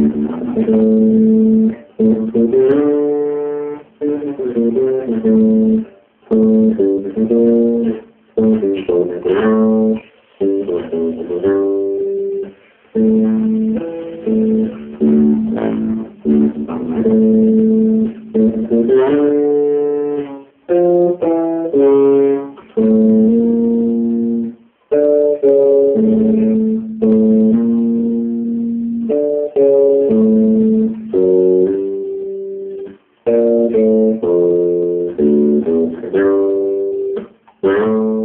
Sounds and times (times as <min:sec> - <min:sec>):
Strum: 0:00.0 - 0:38.2.